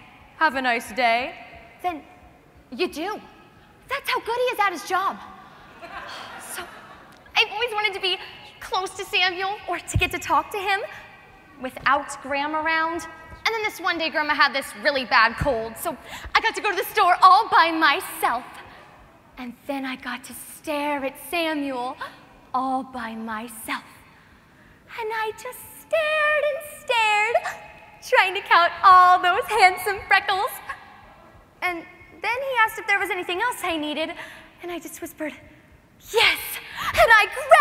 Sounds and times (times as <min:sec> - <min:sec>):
Narration, monologue: 0:00.0 - 0:37.6.